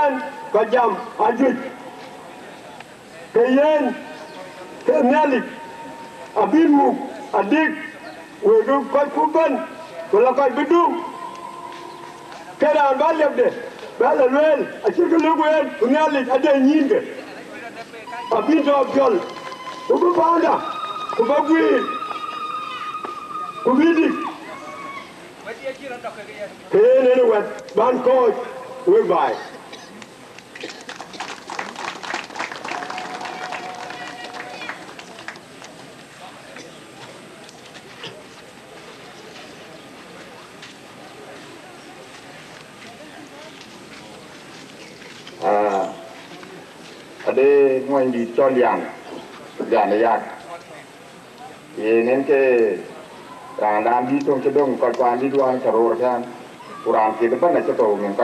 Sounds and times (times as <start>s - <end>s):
Male speech, man speaking: 0.0s - 1.8s, 3.1s - 5.6s, 6.3s - 11.2s, 12.5s - 19.3s, 19.9s - 22.0s, 23.6s - 24.4s, 25.4s - 29.6s, 45.4s - 46.1s, 47.2s - 53.0s, 53.6s - 58.2s
Narration, monologue: 0.0s - 30.8s, 45.3s - 58.2s.